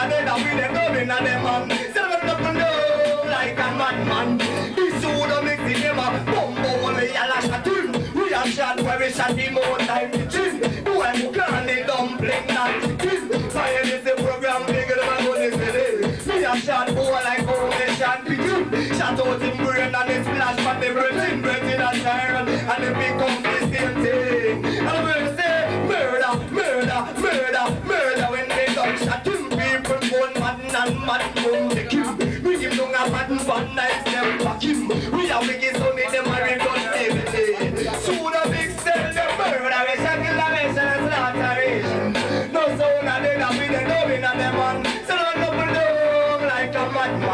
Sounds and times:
Music: 0.0s - 47.3s.

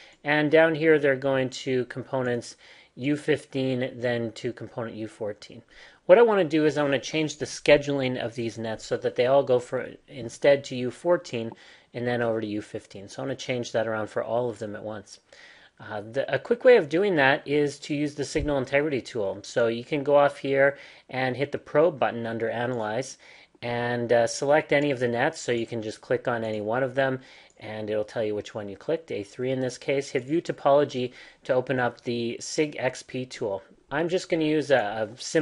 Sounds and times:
Speech: 0.2s - 35.4s.

